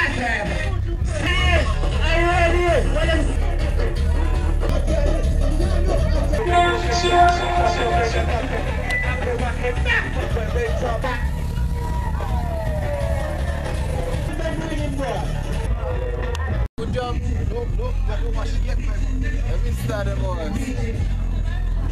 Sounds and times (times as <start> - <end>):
Music: 0.0 - 21.9
Speech: 14.2 - 21.9.